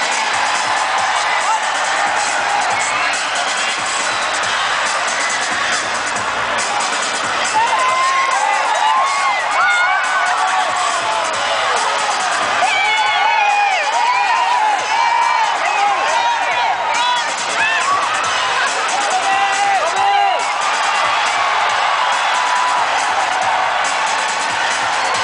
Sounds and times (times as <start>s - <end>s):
Cheering: 0.0s - 25.2s.